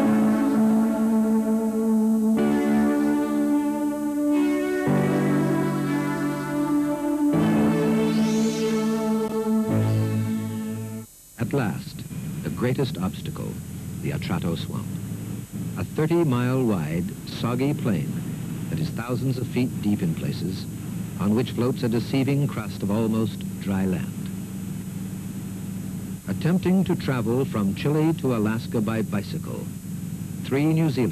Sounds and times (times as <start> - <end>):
Music: 0.0 - 11.1
Speech: 11.4 - 14.9, 15.8 - 24.3, 26.3 - 29.7, 30.5 - 31.1.